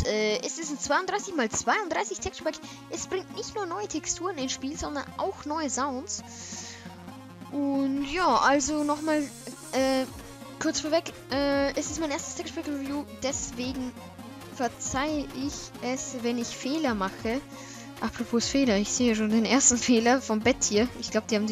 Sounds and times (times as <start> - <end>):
Speech: 0.0 - 6.3, 7.6 - 13.9, 14.6 - 17.4, 18.0 - 21.5
Music: 0.0 - 21.5.